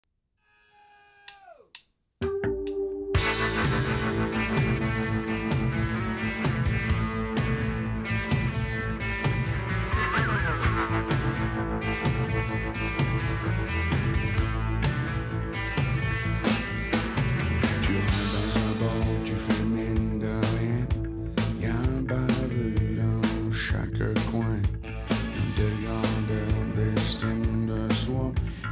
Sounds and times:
Music: 2.2 - 28.7.

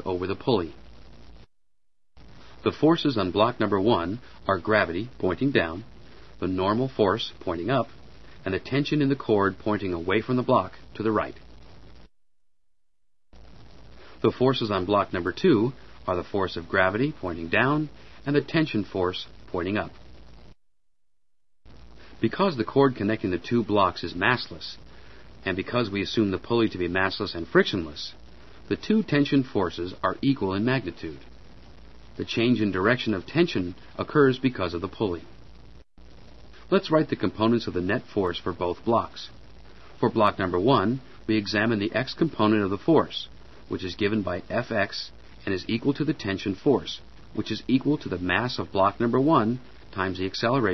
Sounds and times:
Speech: 0.0 - 0.8, 2.6 - 11.4, 14.2 - 20.0, 22.2 - 24.8, 25.4 - 31.3, 32.2 - 35.3, 36.7 - 39.4, 40.0 - 50.7.

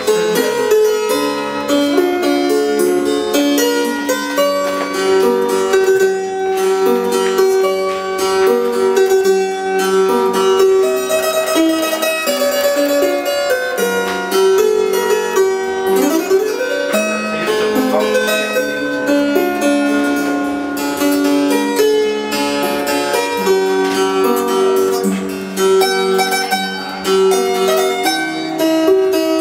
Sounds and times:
Sitar: 0.0 - 29.4.

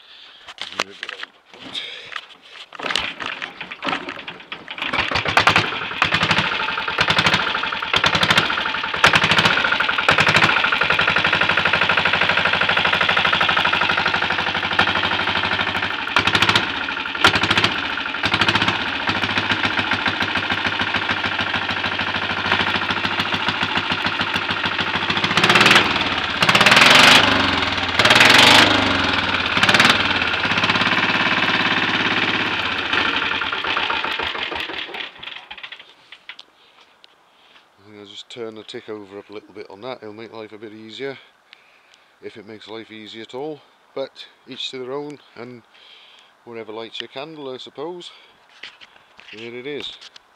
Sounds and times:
Speech: 0.7 - 1.2, 37.8 - 41.3, 42.2 - 45.7, 46.5 - 48.2, 49.3 - 50.0
Motorcycle: 2.8 - 35.9.

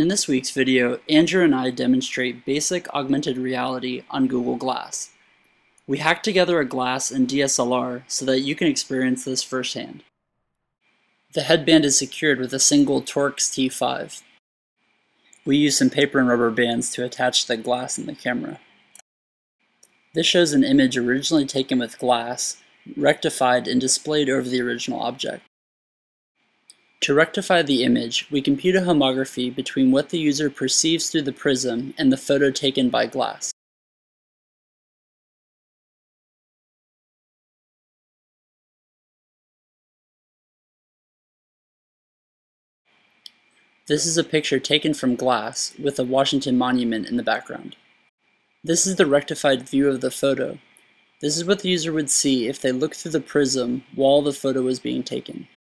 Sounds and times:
Speech: 0.0 - 5.1, 5.9 - 10.1, 11.4 - 14.4, 15.4 - 18.6, 20.2 - 25.5, 27.0 - 33.6, 43.9 - 47.8, 48.7 - 55.6.

